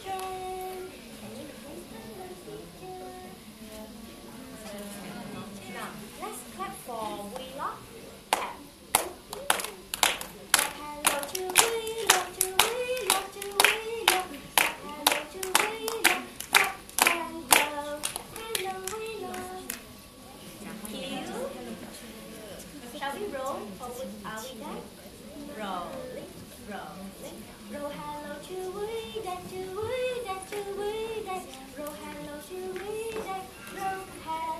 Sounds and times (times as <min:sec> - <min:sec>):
Speech: 0:00.1 - 0:09.2, 0:19.0 - 0:28.5.